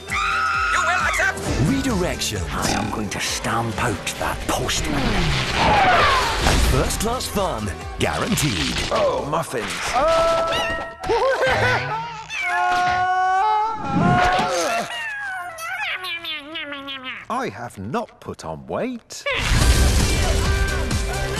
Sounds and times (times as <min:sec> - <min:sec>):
Music: 0:00.0 - 0:11.0, 0:19.4 - 0:21.3
Speech: 0:00.8 - 0:05.3, 0:06.7 - 0:10.0, 0:17.3 - 0:19.3.